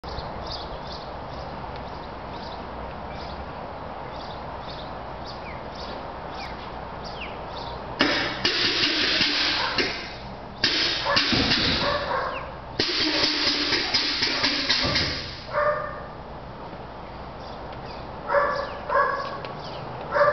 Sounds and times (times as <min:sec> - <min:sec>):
Vehicle: 0:00.0 - 0:20.3.